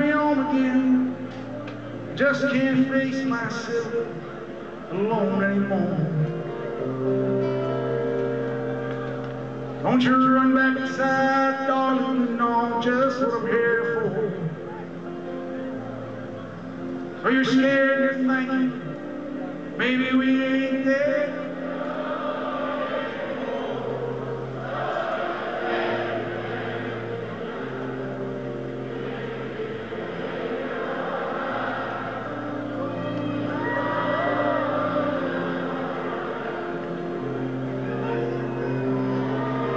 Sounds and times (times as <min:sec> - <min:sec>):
Music: 0:00.0 - 0:39.7.